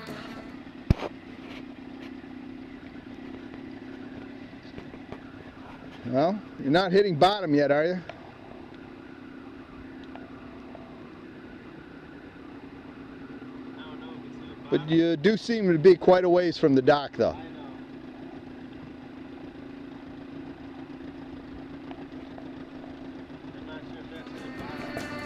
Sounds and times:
Motorboat, speedboat: 15.5 - 25.2.

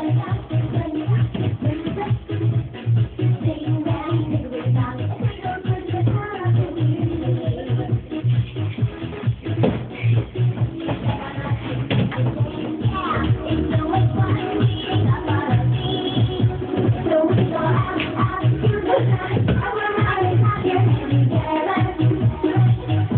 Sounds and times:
Music: 0.0 - 23.1.

